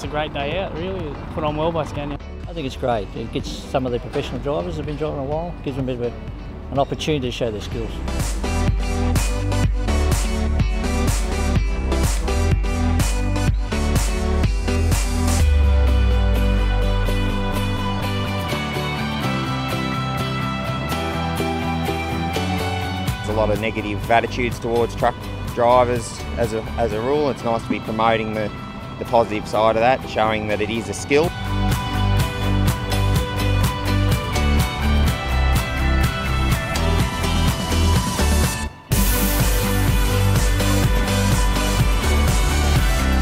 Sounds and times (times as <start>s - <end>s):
Speech: 0.0s - 8.0s, 23.3s - 31.3s
Music: 0.0s - 43.2s.